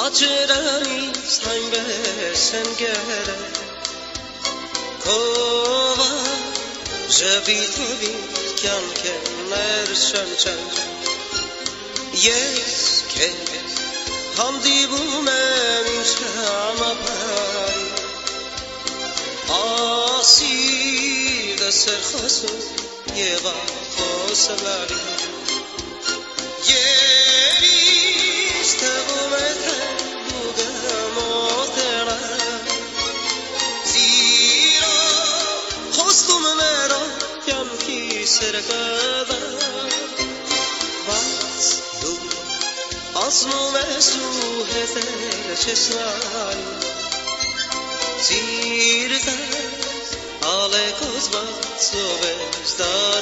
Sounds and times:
Music: 0.0s - 53.2s.

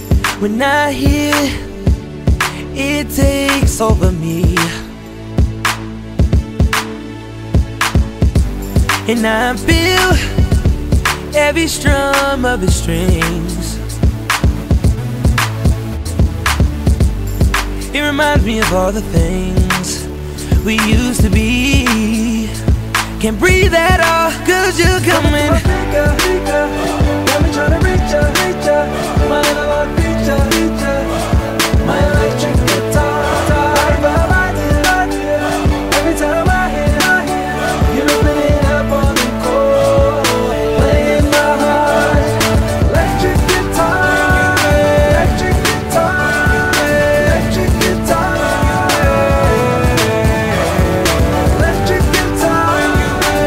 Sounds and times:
Music: 0.0s - 53.4s.

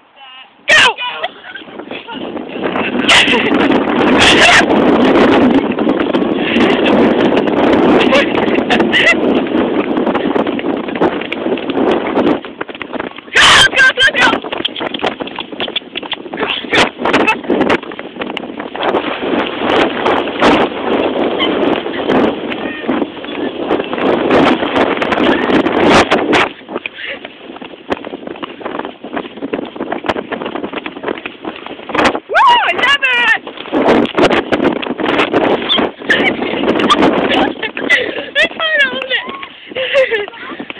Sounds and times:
Clip-clop: 0.2s - 40.8s.

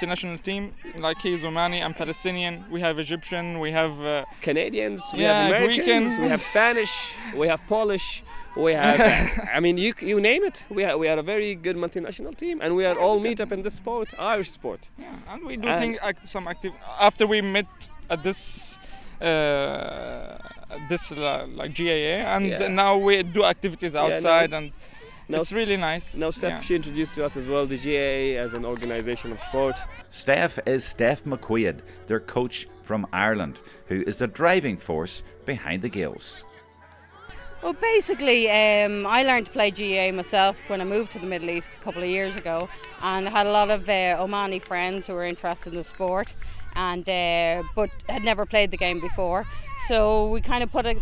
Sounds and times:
Speech: 5.1s - 6.6s, 15.6s - 16.7s.

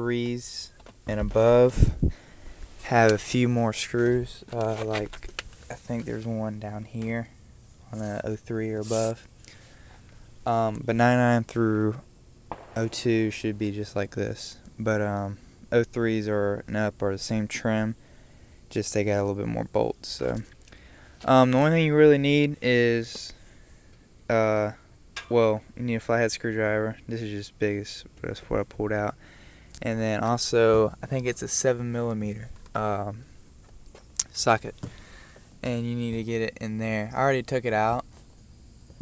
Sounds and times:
Speech: 0.0s - 2.0s, 2.8s - 7.3s, 7.9s - 9.2s, 10.5s - 12.0s, 12.8s - 18.0s, 18.7s - 20.5s, 21.2s - 23.4s, 24.3s - 29.2s, 29.8s - 33.3s, 34.2s - 34.8s, 35.6s - 38.0s.

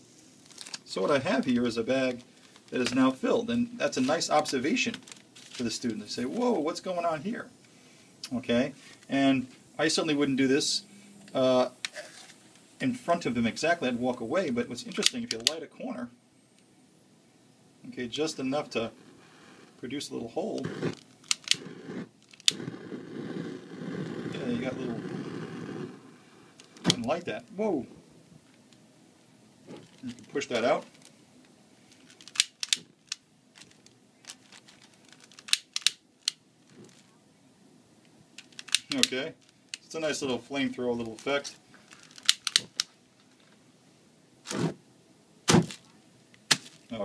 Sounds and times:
Speech: 0.9s - 5.0s, 5.6s - 7.5s, 8.3s - 11.8s, 12.8s - 16.2s, 17.8s - 19.0s, 19.8s - 20.8s, 24.3s - 25.1s, 26.9s - 28.0s, 30.0s - 30.9s, 38.9s - 41.6s.

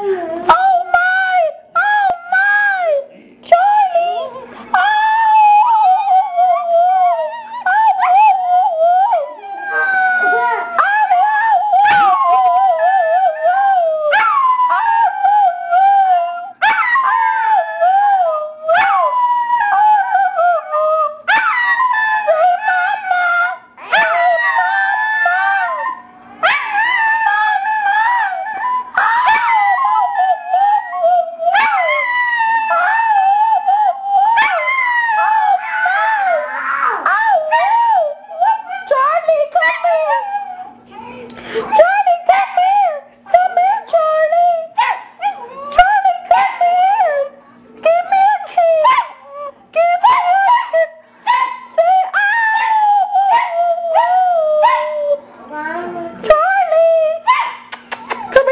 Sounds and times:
Howl: 4.8s - 41.1s, 41.7s - 57.4s
Whimper (dog): 4.8s - 44.0s.

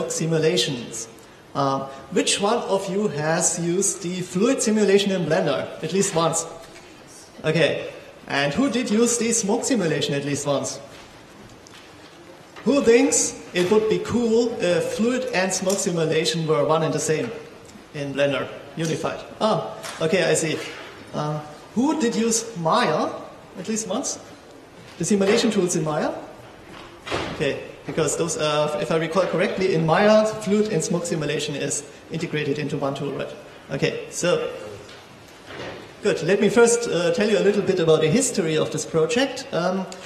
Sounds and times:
Speech: 0.0s - 10.9s, 12.6s - 24.3s, 25.0s - 26.3s, 27.3s - 34.9s, 36.0s - 40.0s.

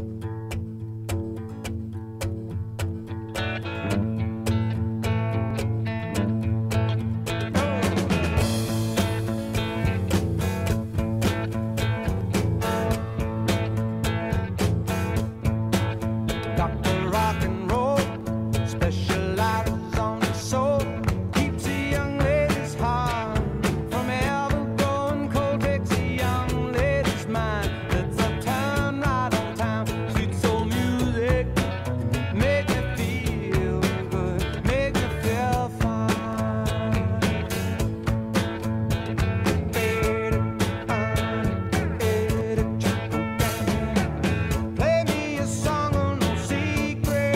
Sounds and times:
Rock and roll: 0.0s - 47.3s.

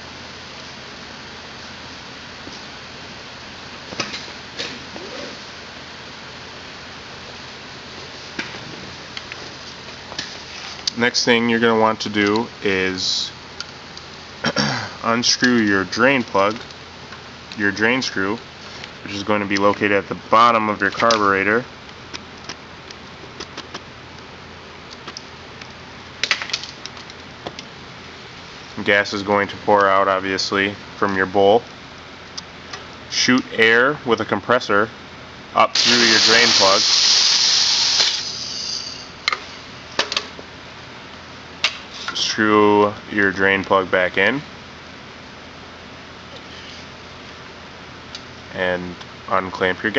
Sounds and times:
Speech: 10.9s - 13.4s, 15.0s - 16.6s, 17.6s - 18.4s, 19.0s - 21.7s, 28.8s - 31.7s, 33.1s - 35.0s, 35.6s - 36.8s, 42.1s - 44.5s, 48.5s - 49.9s.

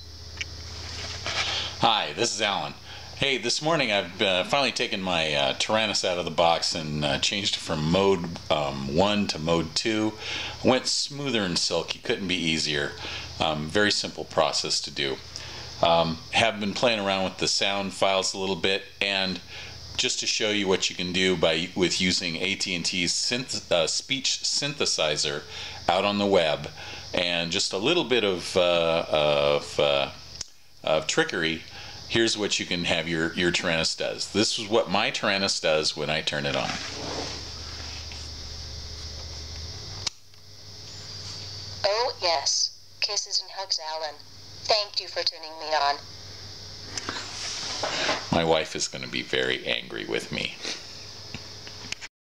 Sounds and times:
Speech: 1.8s - 15.2s, 15.8s - 30.2s, 30.8s - 36.9s, 41.8s - 46.0s, 48.3s - 50.7s.

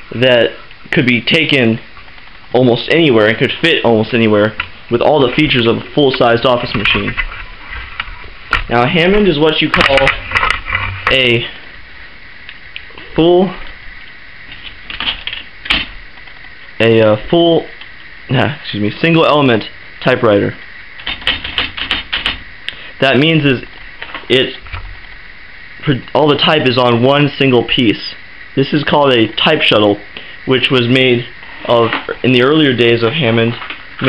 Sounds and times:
Speech: 0.1s - 1.9s, 2.5s - 7.2s, 8.7s - 10.2s, 11.1s - 11.6s, 13.0s - 13.7s, 16.8s - 20.6s, 23.0s - 23.7s, 24.3s - 24.6s, 25.8s - 34.0s
Typewriter: 14.5s - 15.9s, 21.0s - 22.4s.

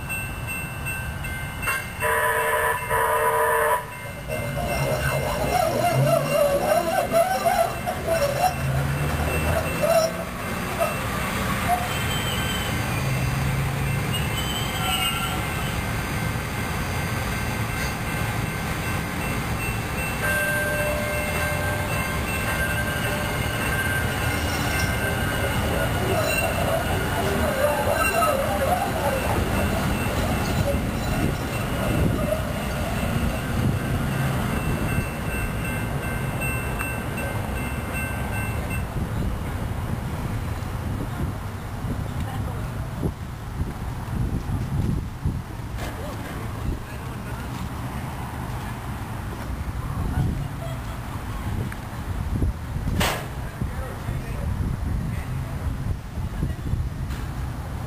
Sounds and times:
Railroad car, train wagon: 0.0s - 57.8s
Train: 0.0s - 57.8s.

